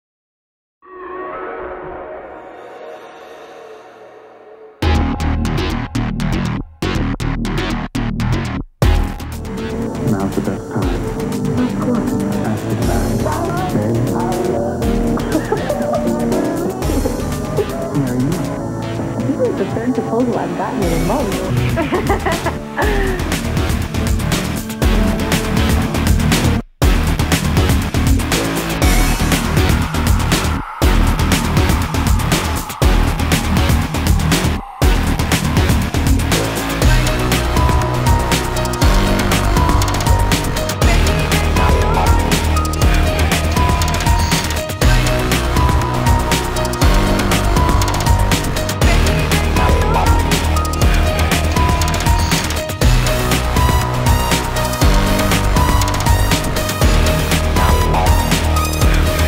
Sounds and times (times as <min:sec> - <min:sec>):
Music: 0:00.8 - 0:59.2
Speech: 0:10.0 - 0:15.7, 0:19.2 - 0:21.5.